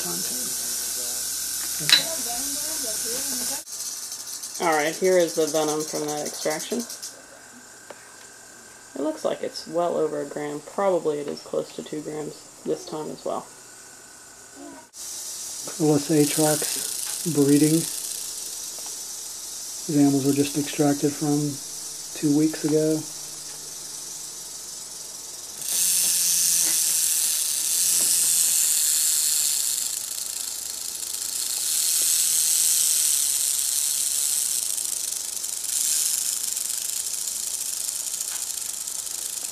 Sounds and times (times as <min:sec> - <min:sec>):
Snake: 0:00.0 - 0:39.5
Speech: 0:09.0 - 0:13.5, 0:15.7 - 0:17.9, 0:19.9 - 0:21.6.